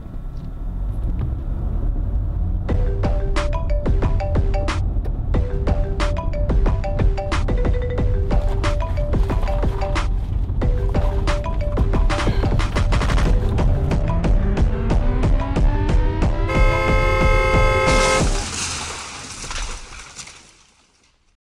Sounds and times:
Music: 0:02.6 - 0:18.4.

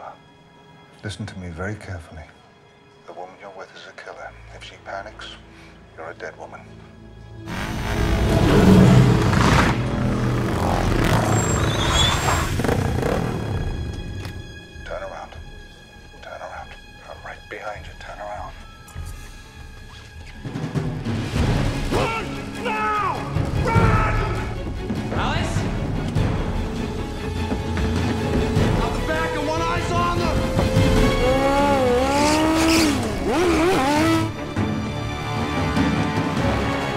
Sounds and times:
Music: 0:00.0 - 0:36.9.

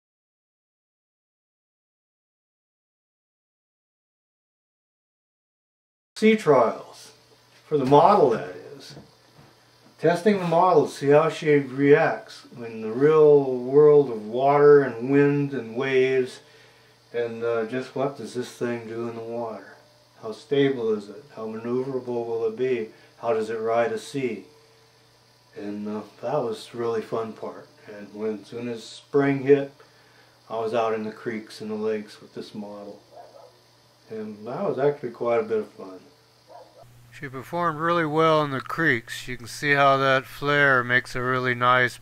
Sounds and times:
Speech: 0:06.2 - 0:09.0, 0:10.0 - 0:16.4, 0:17.1 - 0:24.5, 0:25.6 - 0:29.8, 0:30.5 - 0:33.0, 0:34.1 - 0:36.1, 0:37.1 - 0:42.0.

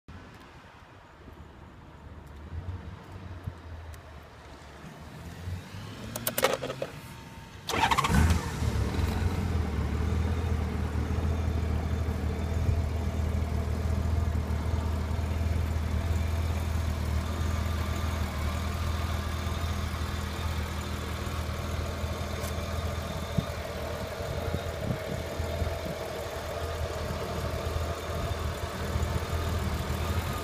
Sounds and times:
Motorcycle: 0:04.6 - 0:30.4.

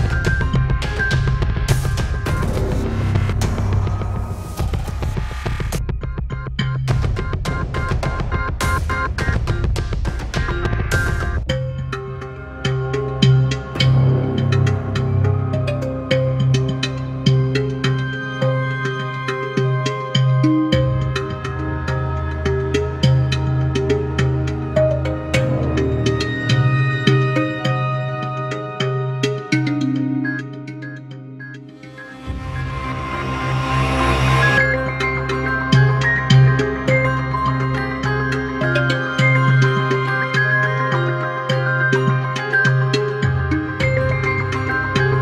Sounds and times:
Music: 0:00.0 - 0:45.2.

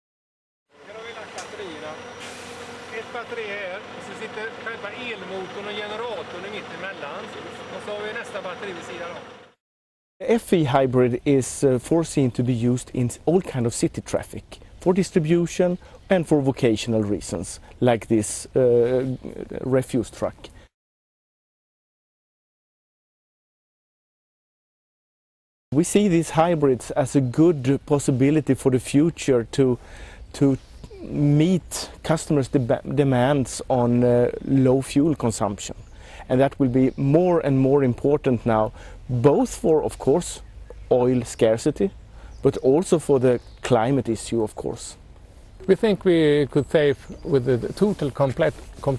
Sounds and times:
Speech: 0:00.8 - 0:02.1, 0:02.9 - 0:09.3, 0:10.2 - 0:20.5, 0:25.7 - 0:45.0, 0:45.6 - 0:48.9.

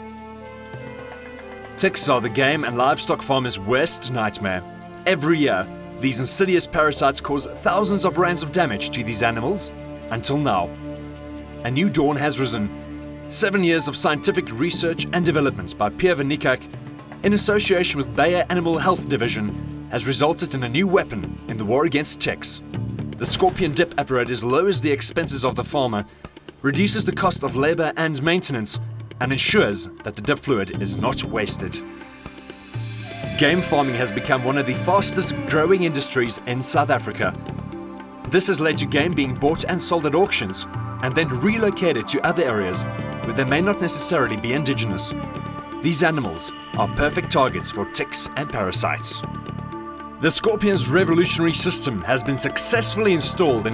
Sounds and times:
Music: 0:00.0 - 0:53.7
Speech: 0:01.8 - 0:10.7, 0:11.6 - 0:12.7, 0:13.3 - 0:16.6, 0:17.2 - 0:22.6, 0:23.2 - 0:26.0, 0:26.6 - 0:31.8, 0:33.4 - 0:37.4, 0:38.3 - 0:45.2, 0:45.8 - 0:49.3, 0:50.2 - 0:53.7.

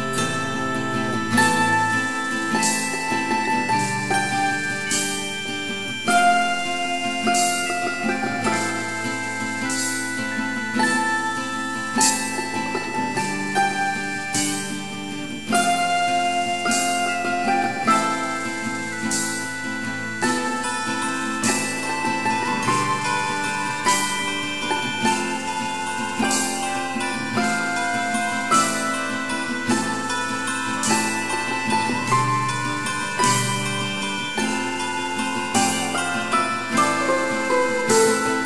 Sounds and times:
Jingle, tinkle: 0:00.0 - 0:38.4.

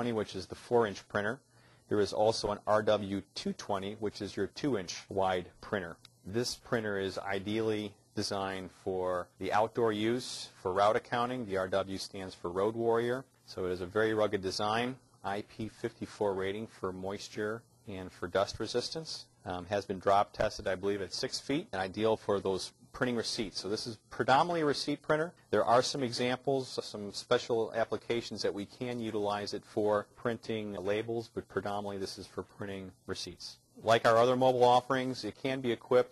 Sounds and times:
Speech: 0:00.0 - 0:36.1.

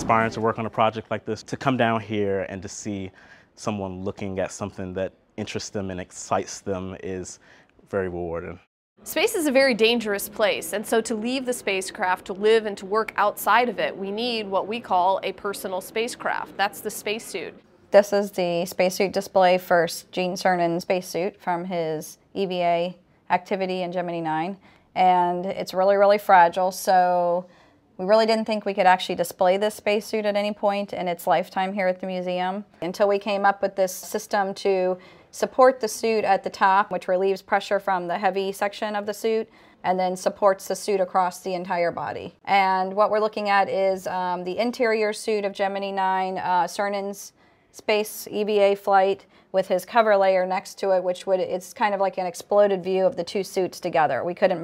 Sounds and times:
Speech: 0:00.0 - 0:27.4.

